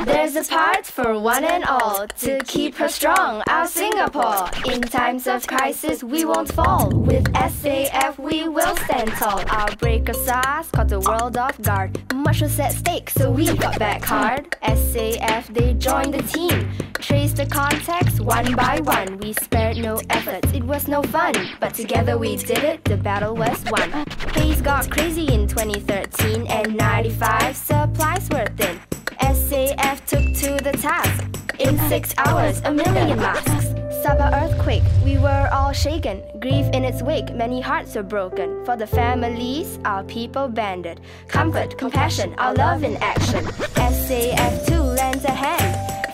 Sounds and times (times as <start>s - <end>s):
Music: 0.0s - 46.1s
Speech: 3.7s - 43.4s.